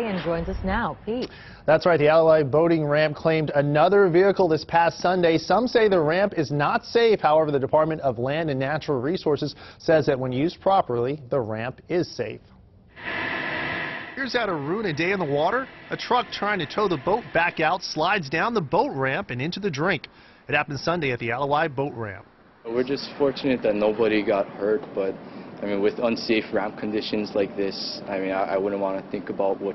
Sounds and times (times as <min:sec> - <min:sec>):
Speech: 0:14.2 - 0:29.7.